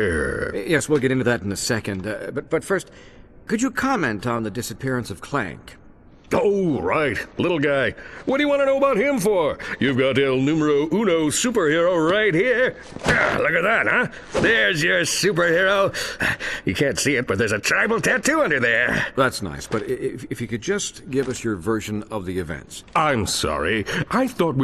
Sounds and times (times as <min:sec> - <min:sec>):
Speech: 0:00.0 - 0:02.9, 0:03.5 - 0:16.0, 0:16.7 - 0:24.6.